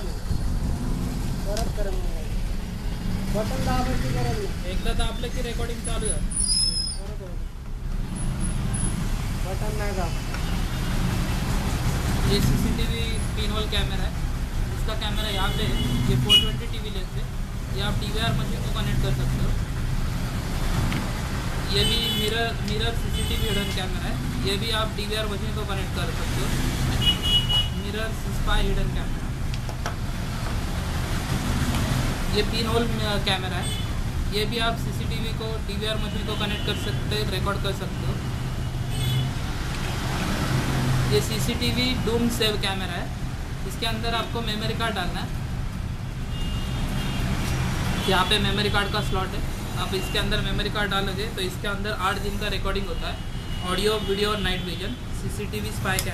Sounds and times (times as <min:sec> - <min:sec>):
Speech: 0:27.8 - 0:29.2, 0:32.3 - 0:33.7, 0:41.1 - 0:45.4, 0:48.1 - 0:56.1.